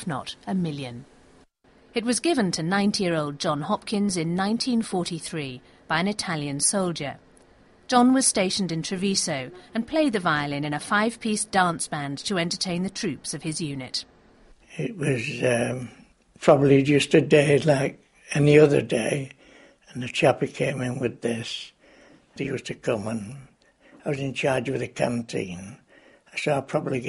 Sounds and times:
Speech: 0.0s - 1.0s, 2.0s - 7.2s, 7.9s - 14.0s, 14.7s - 19.3s, 19.9s - 21.7s, 22.4s - 25.8s, 26.4s - 27.0s.

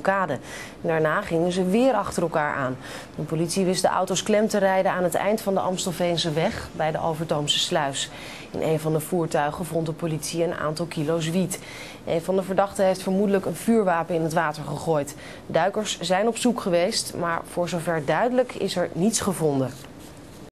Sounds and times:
Speech: 0.0s - 19.9s.

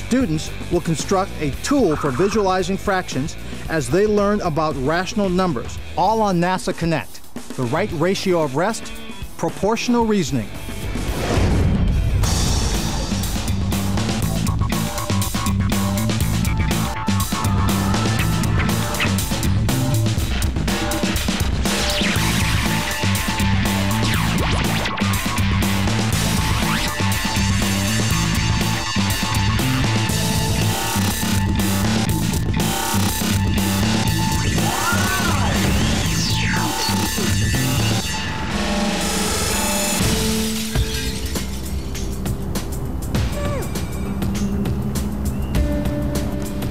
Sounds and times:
Speech: 0.0s - 10.5s
Music: 0.0s - 46.7s.

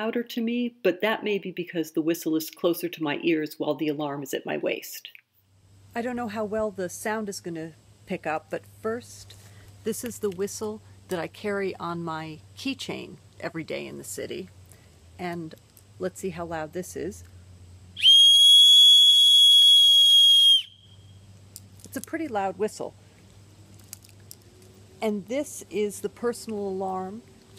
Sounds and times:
Speech: 0.0s - 5.2s, 6.0s - 14.5s, 15.2s - 17.2s, 21.9s - 22.9s, 25.0s - 27.2s
Whistle: 18.0s - 21.2s.

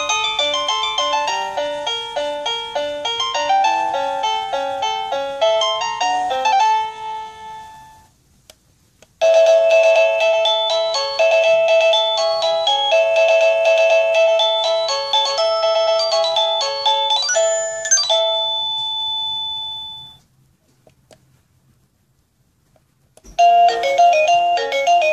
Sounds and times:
Music: 0.0s - 8.1s, 9.2s - 19.0s, 23.4s - 25.1s.

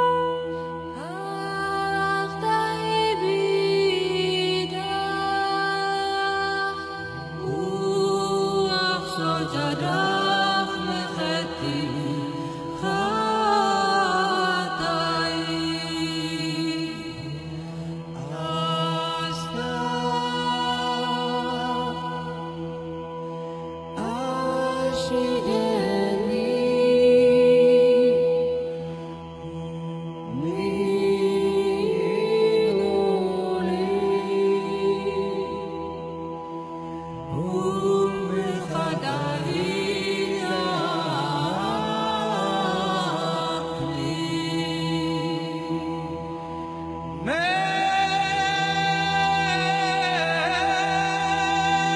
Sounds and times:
Mantra: 0.0s - 51.9s.

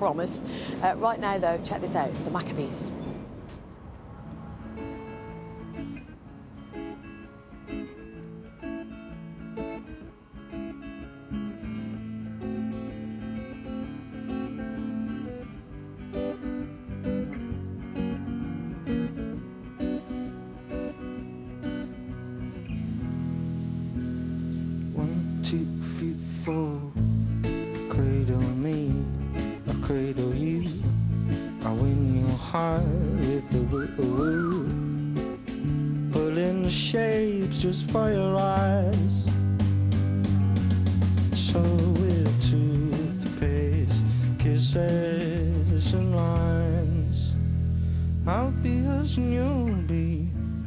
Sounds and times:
Music: 3.7s - 50.6s.

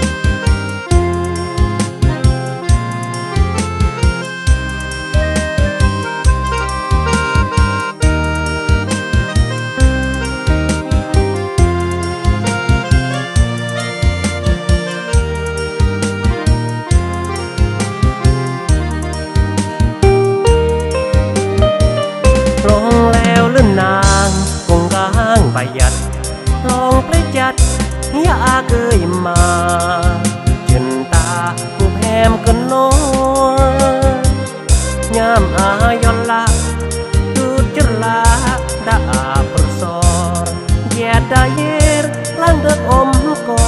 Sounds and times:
Music: 0.0s - 43.6s.

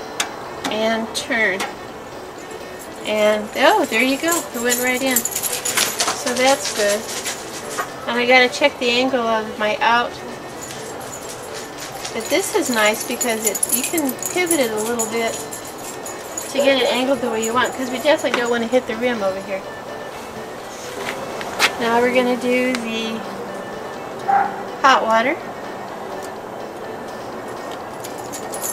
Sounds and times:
Music: 0.0s - 28.7s
Speech: 0.7s - 1.7s, 3.1s - 5.3s, 6.2s - 7.1s, 8.1s - 10.3s, 12.2s - 15.4s, 16.5s - 19.6s, 21.8s - 23.3s, 24.8s - 25.4s.

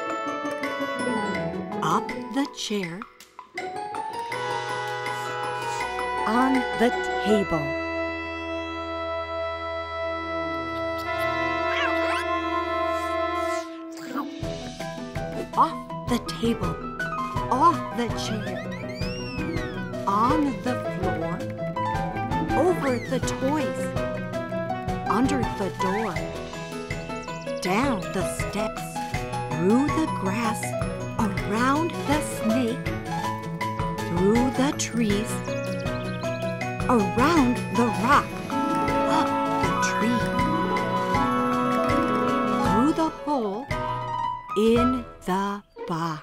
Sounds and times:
Music: 0.0s - 46.2s
Speech: 1.8s - 3.0s, 6.2s - 7.8s, 11.7s - 12.6s, 15.4s - 16.8s, 17.5s - 18.5s, 20.0s - 21.5s, 22.6s - 23.9s, 25.1s - 26.2s, 27.6s - 32.8s, 34.1s - 35.4s, 36.9s - 38.3s, 39.1s - 40.6s, 42.6s - 43.7s, 44.6s - 46.2s.

